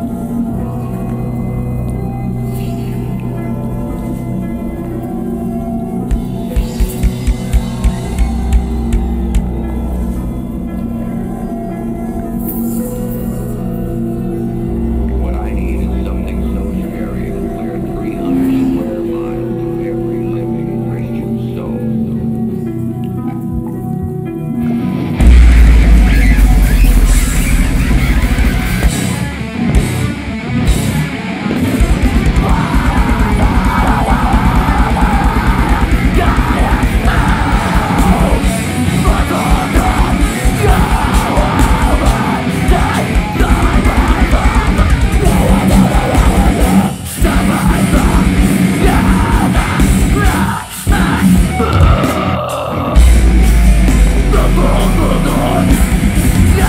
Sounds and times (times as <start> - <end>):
Music: 0.0 - 56.6
Speech: 15.1 - 22.3.